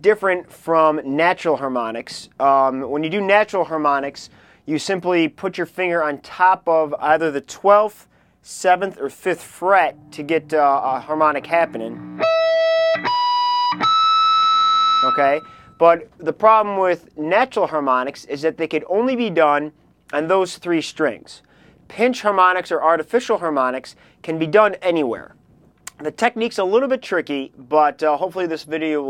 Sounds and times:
Speech: 0:00.0 - 0:12.0, 0:15.0 - 0:29.0.

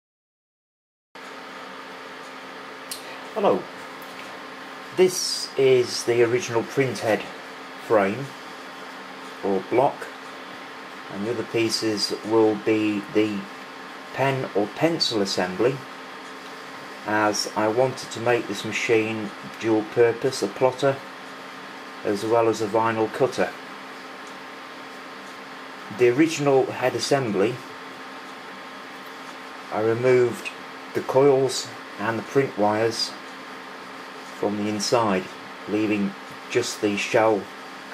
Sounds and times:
Speech: 0:03.4 - 0:03.7, 0:04.9 - 0:08.4, 0:09.4 - 0:10.2, 0:11.1 - 0:13.5, 0:14.1 - 0:15.9, 0:17.0 - 0:21.1, 0:22.0 - 0:23.6, 0:25.9 - 0:27.8, 0:29.7 - 0:33.2, 0:34.4 - 0:37.5.

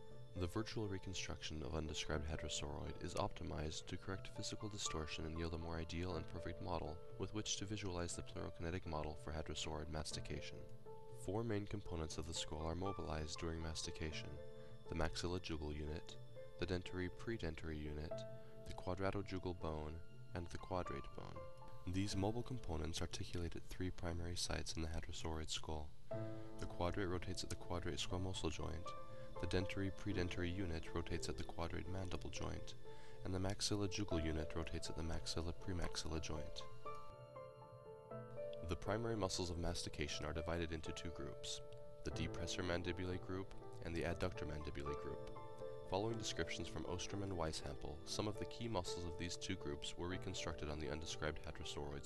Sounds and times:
Music: 0:00.0 - 0:52.0
Speech: 0:00.4 - 0:25.9, 0:26.6 - 0:36.7, 0:38.6 - 0:45.3, 0:45.9 - 0:52.0.

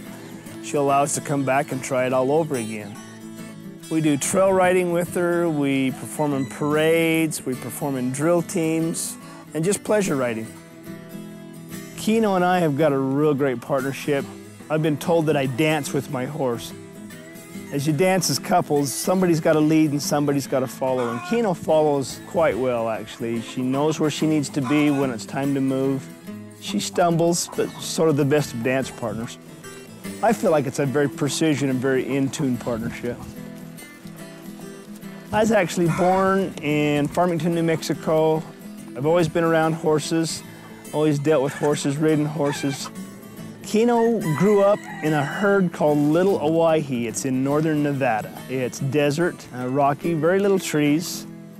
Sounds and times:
Music: 0:00.0 - 0:51.5
Speech: 0:00.6 - 0:03.0, 0:03.9 - 0:10.5, 0:12.0 - 0:16.7, 0:17.7 - 0:26.0, 0:26.6 - 0:29.4, 0:30.2 - 0:33.3, 0:35.3 - 0:38.4, 0:39.0 - 0:42.9, 0:43.6 - 0:51.3.

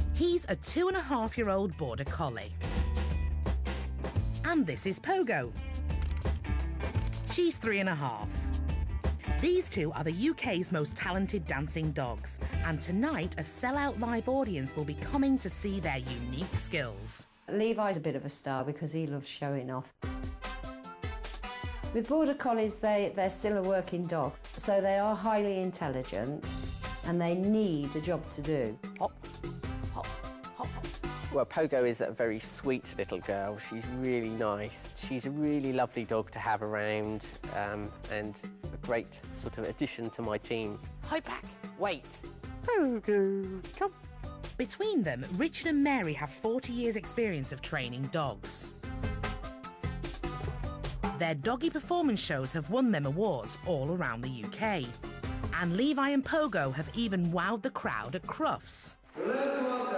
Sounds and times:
Music: 0:00.0 - 0:59.9.

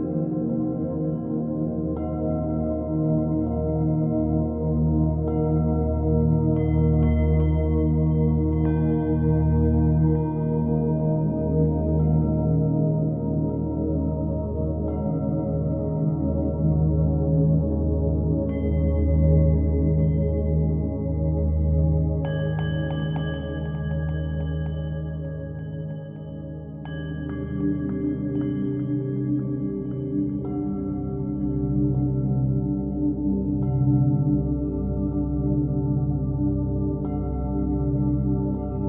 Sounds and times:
New-age music: 0:00.0 - 0:38.8.

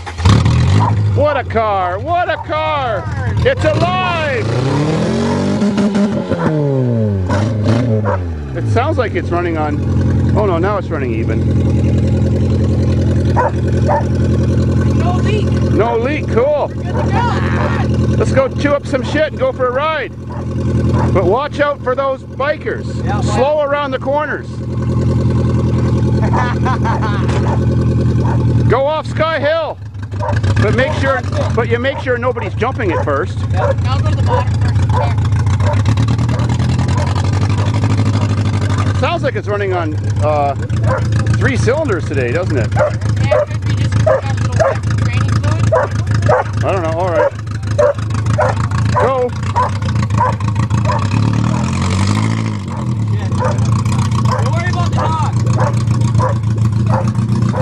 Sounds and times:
Car: 0:00.0 - 0:57.6
Outside, rural or natural: 0:00.0 - 0:57.6
Speech: 0:43.2 - 0:47.3, 0:54.4 - 0:55.4.

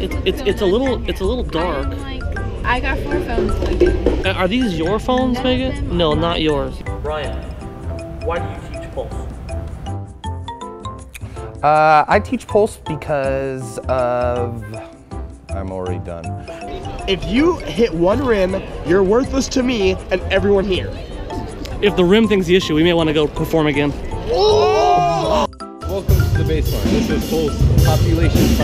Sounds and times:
Percussion: 0:00.0 - 0:28.6.

